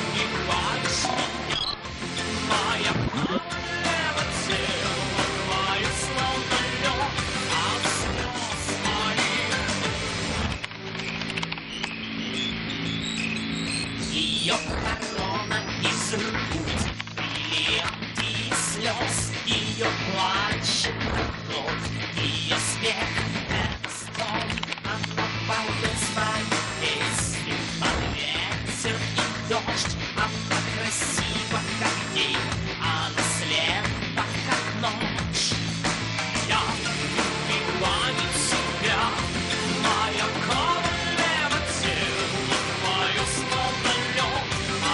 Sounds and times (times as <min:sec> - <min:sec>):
Music: 0:00.0 - 0:44.9.